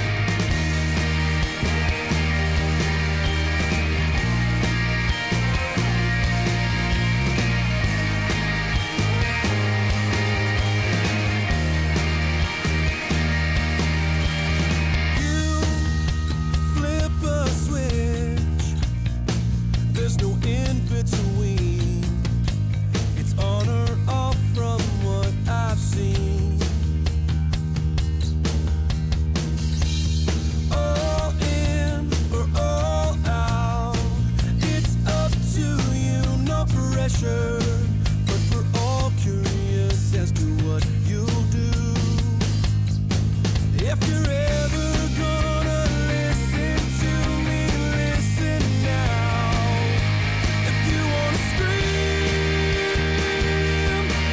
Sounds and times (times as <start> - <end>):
Tender music: 0.0 - 24.1.